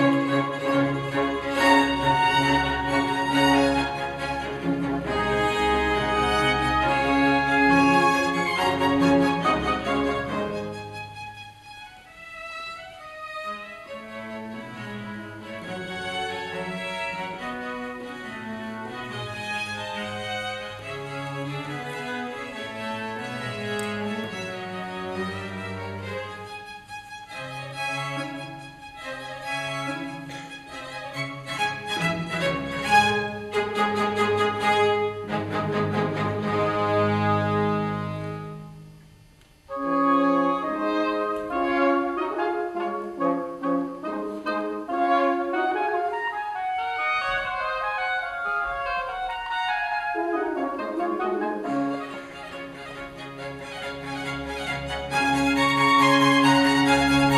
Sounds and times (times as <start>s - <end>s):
Music: 0.0s - 57.3s.